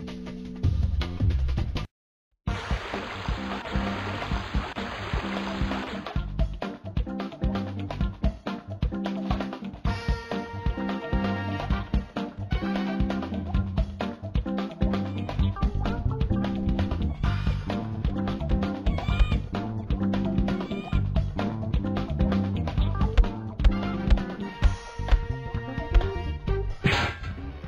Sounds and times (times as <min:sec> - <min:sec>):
Music: 0:00.0 - 0:01.9, 0:02.5 - 0:27.6.